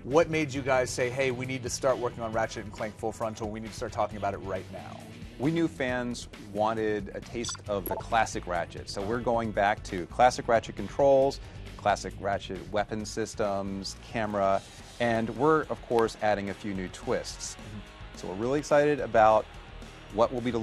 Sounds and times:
Speech: 0.0s - 19.4s, 20.2s - 20.6s
Music: 0.0s - 20.6s.

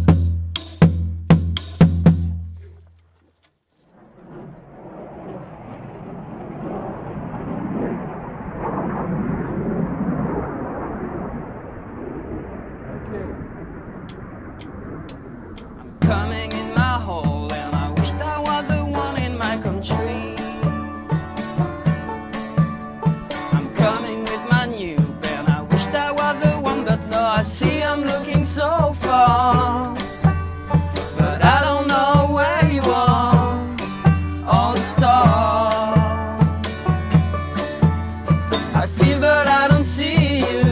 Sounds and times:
Music: 0.0s - 2.5s, 16.0s - 40.7s.

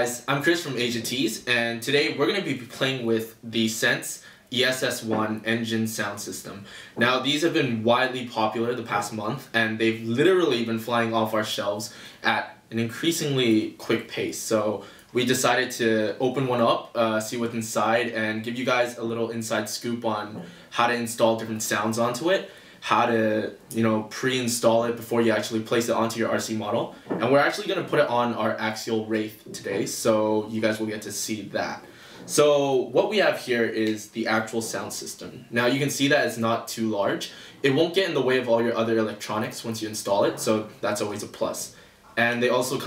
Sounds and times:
Speech: 0.0s - 42.8s.

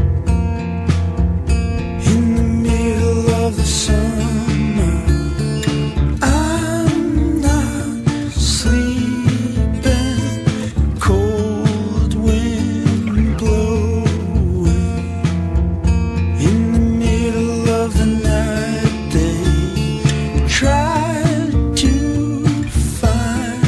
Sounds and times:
Music: 0.0s - 23.6s.

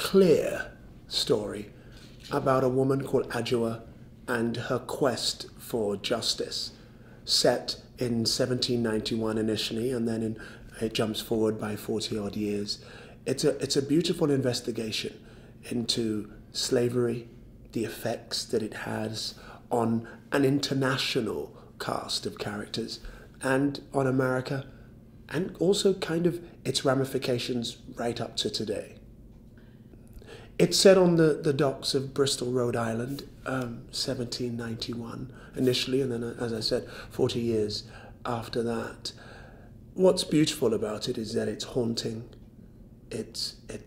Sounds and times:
Speech: 0.0s - 29.0s, 30.6s - 39.2s, 40.0s - 42.4s, 43.1s - 43.8s.

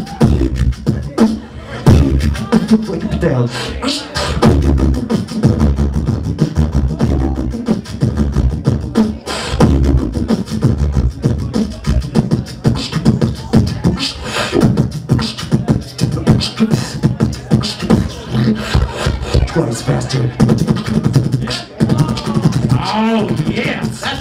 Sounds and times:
Speech: 0.0s - 4.6s, 8.8s - 24.2s.

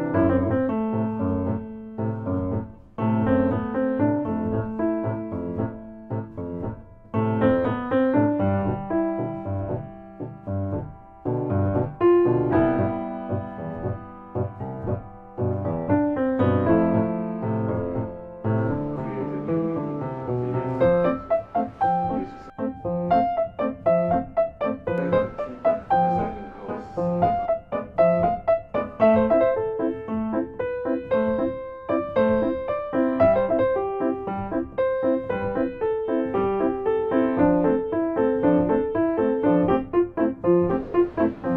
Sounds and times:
Music: 0.0s - 41.5s
Speech: 18.6s - 21.2s, 24.9s - 27.3s.

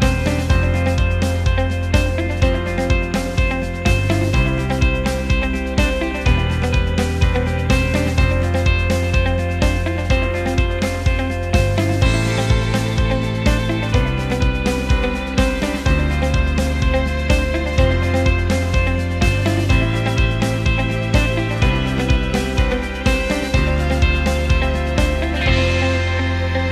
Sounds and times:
Music: 0.0s - 26.7s.

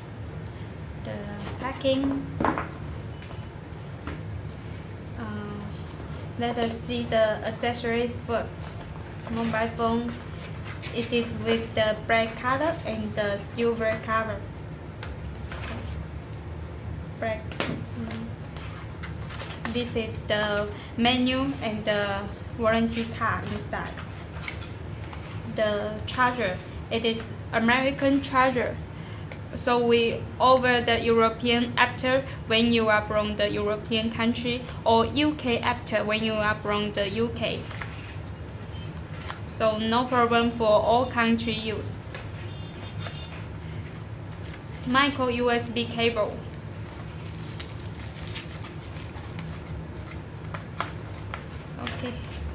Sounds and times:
Speech: 1.1s - 2.3s, 5.2s - 5.8s, 6.4s - 10.2s, 11.0s - 14.4s, 17.2s - 18.3s, 19.7s - 24.0s, 25.5s - 28.8s, 29.6s - 37.7s, 39.5s - 42.0s, 44.9s - 46.4s, 51.8s - 52.3s.

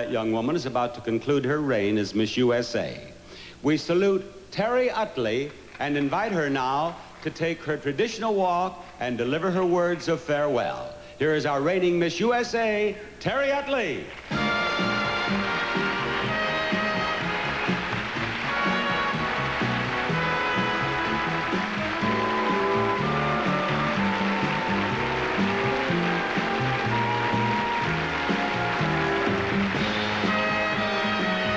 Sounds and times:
Speech: 0.0s - 14.1s
Music: 14.1s - 31.5s.

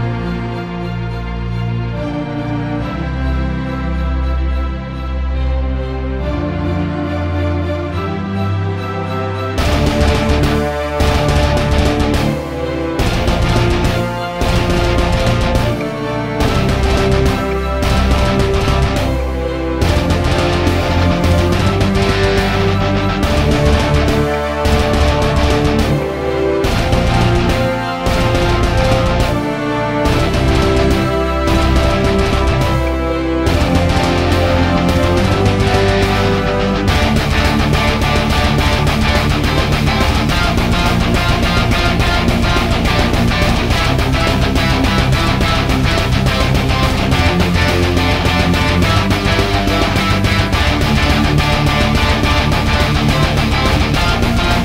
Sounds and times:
Soundtrack music: 0.0s - 54.6s.

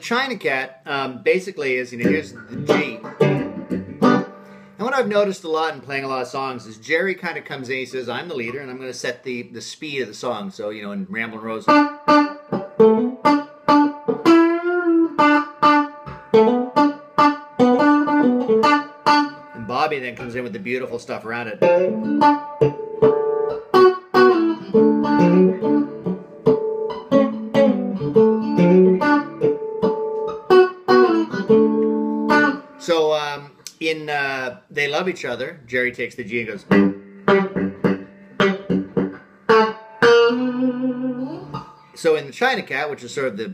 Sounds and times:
Speech: 0.0s - 3.1s, 4.8s - 11.8s, 19.6s - 21.7s, 32.8s - 36.8s, 41.2s - 43.5s
Music: 2.0s - 4.8s, 11.7s - 19.6s, 21.6s - 32.8s, 36.7s - 42.0s.

